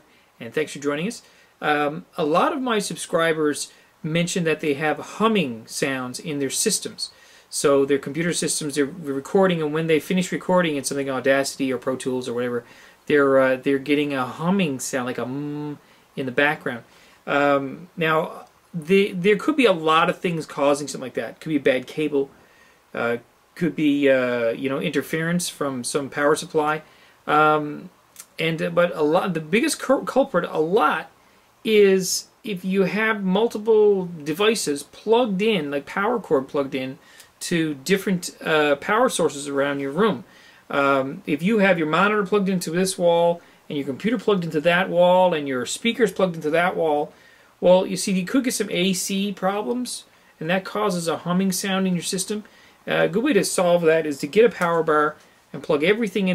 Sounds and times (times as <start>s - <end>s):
Speech: 0.0s - 56.3s.